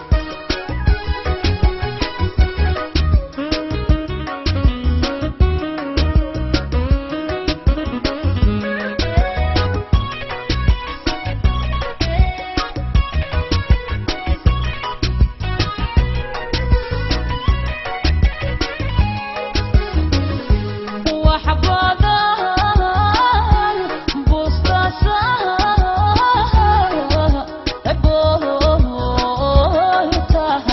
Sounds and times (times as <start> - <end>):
Music: 0.0 - 30.7.